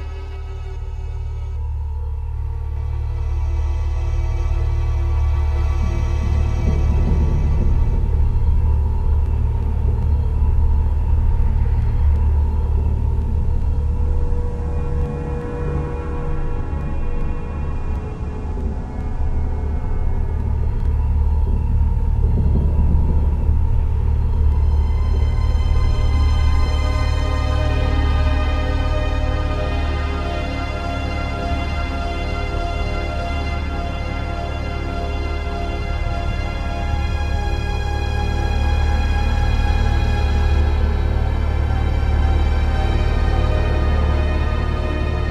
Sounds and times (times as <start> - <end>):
Ambient music: 0.0 - 45.3
Scary music: 0.0 - 45.3.